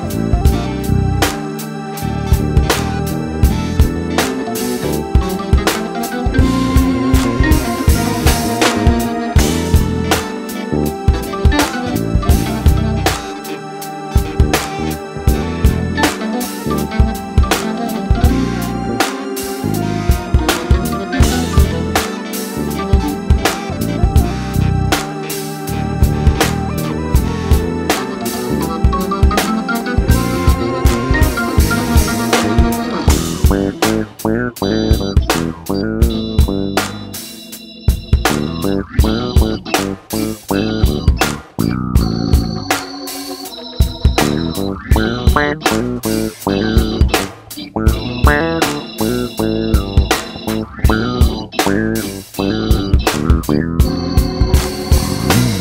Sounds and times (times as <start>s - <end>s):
Music: 0.0s - 55.6s.